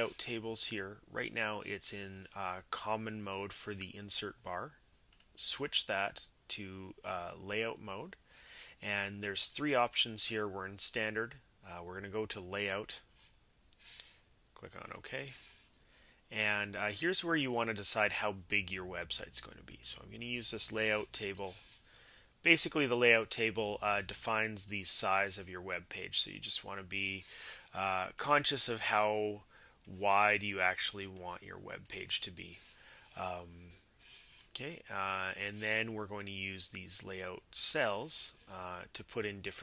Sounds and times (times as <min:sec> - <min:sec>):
Speech: 0:00.0 - 0:04.8, 0:05.4 - 0:08.2, 0:08.8 - 0:13.1, 0:14.6 - 0:15.5, 0:16.3 - 0:21.6, 0:22.5 - 0:33.8, 0:34.6 - 0:39.6.